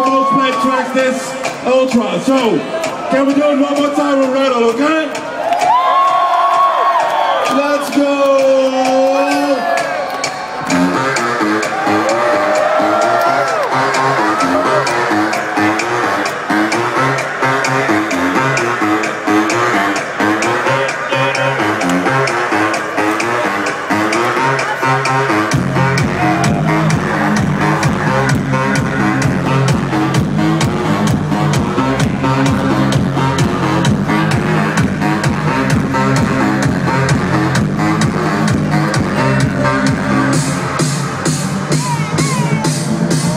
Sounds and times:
Pop music: 8.0s - 43.3s.

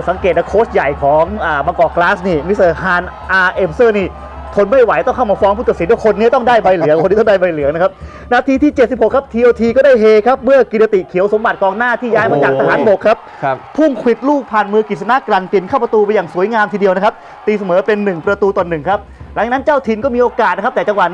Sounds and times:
Music: 0.0s - 21.1s
Speech: 0.0s - 21.1s.

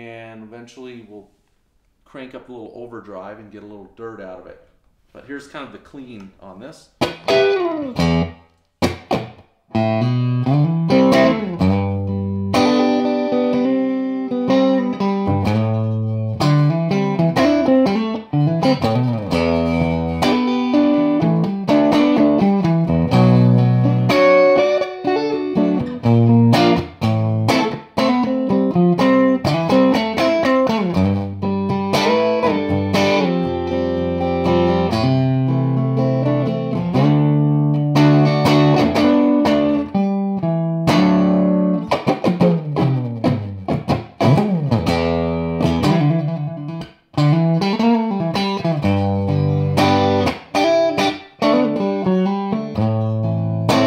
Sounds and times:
Electric guitar: 7.0s - 53.8s.

